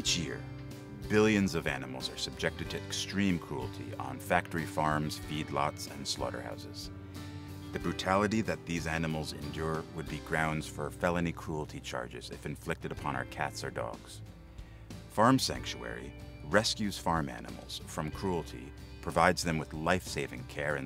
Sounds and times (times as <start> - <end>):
Speech: 0.0 - 0.4, 1.0 - 6.9, 7.7 - 14.2, 15.1 - 20.8
Music: 0.0 - 20.8.